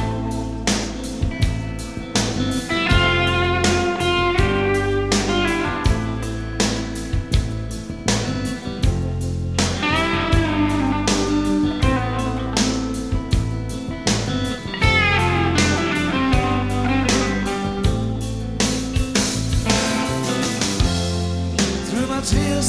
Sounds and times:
Music: 0.0s - 22.6s.

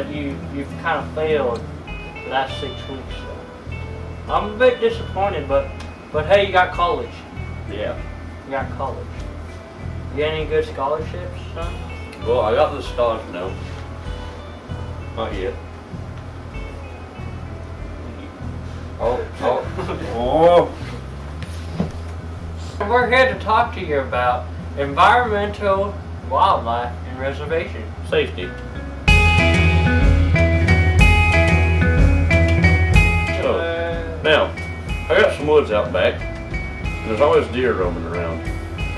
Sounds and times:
Music: 0.0s - 38.9s
Speech: 19.0s - 20.8s, 22.8s - 28.6s, 33.4s - 36.2s, 37.0s - 38.5s.

